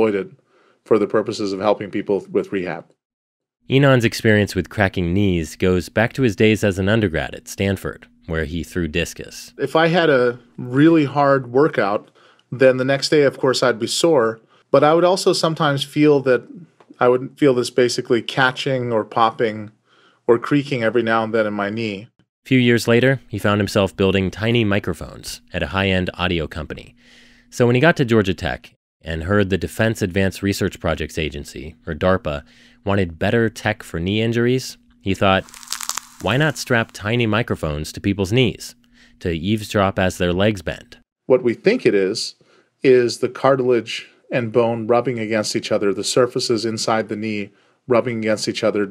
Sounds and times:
Speech: 0.0s - 3.0s, 3.7s - 26.9s, 27.5s - 35.5s, 36.2s - 48.9s.

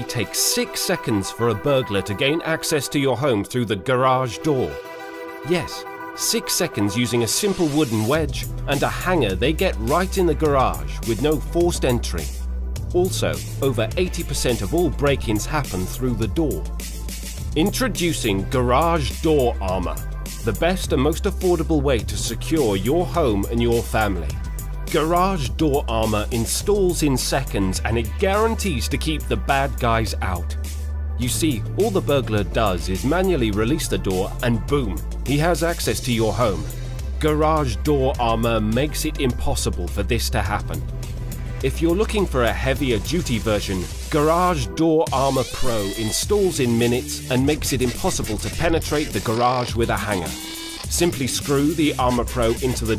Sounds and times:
Speech: 0.0s - 4.8s, 5.4s - 12.4s, 13.0s - 16.7s, 17.6s - 30.6s, 31.2s - 40.8s, 41.6s - 52.9s
Music: 0.0s - 52.9s.

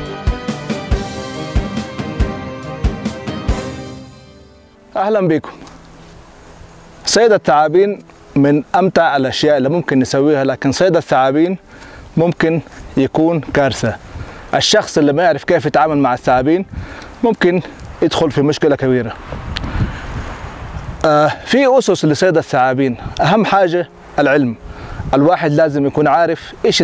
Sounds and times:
Music: 0.0s - 15.2s, 21.8s - 26.8s
Outside, rural or natural: 0.0s - 26.8s
Speech: 5.0s - 5.6s, 7.1s - 11.6s, 12.2s - 14.0s, 14.6s - 19.2s, 21.0s - 26.8s.

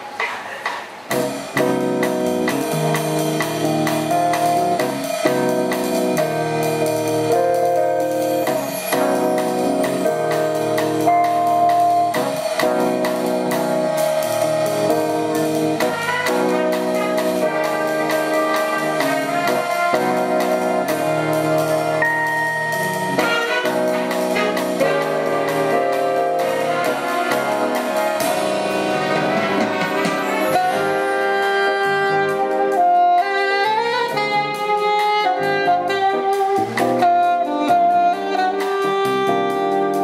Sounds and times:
Independent music: 0.0s - 40.0s
Rhythm and blues: 0.0s - 40.0s.

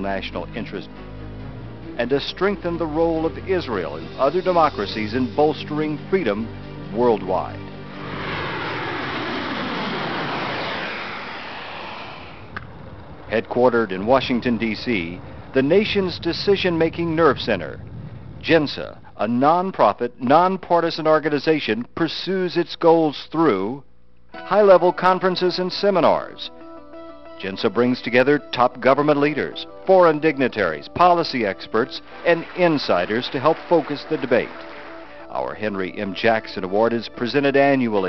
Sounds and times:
Speech: 0.0s - 0.9s, 2.0s - 7.6s, 13.3s - 17.8s, 18.4s - 26.5s, 27.4s - 34.5s, 35.3s - 38.0s
Music: 0.0s - 9.2s, 14.0s - 17.4s, 24.3s - 38.0s.

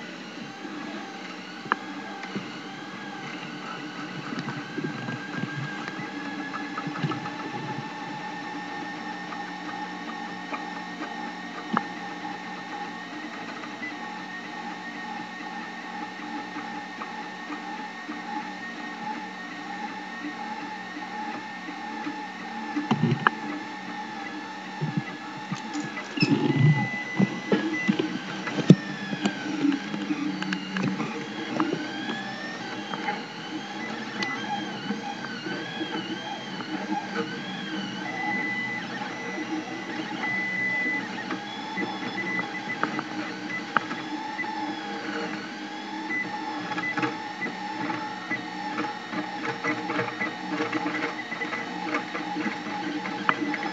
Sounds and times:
Printer: 0.0s - 53.7s.

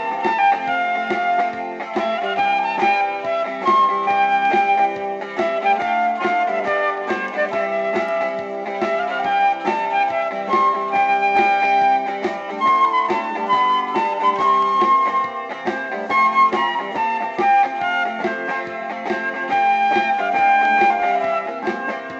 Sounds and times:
Christian music: 0.0s - 22.1s
Guitar: 0.0s - 22.1s.

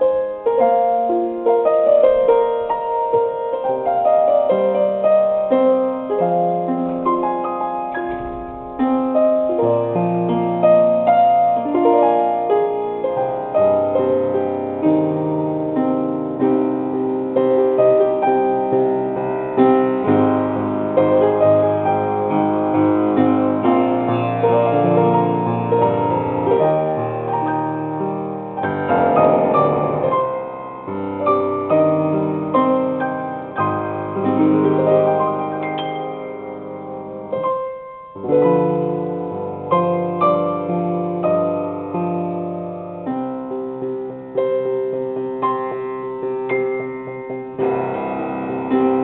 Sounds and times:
Music: 0.0s - 49.0s.

